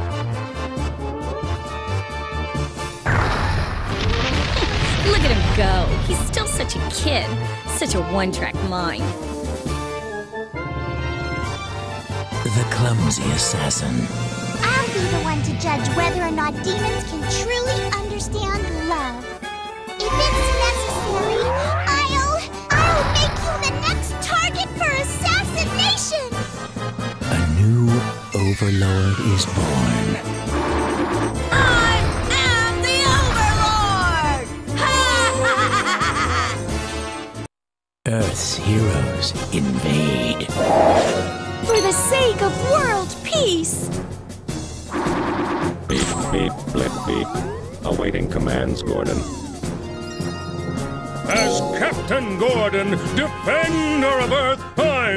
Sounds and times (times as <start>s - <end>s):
Music: 0.0s - 55.1s
Speech: 38.1s - 40.5s, 47.9s - 49.2s.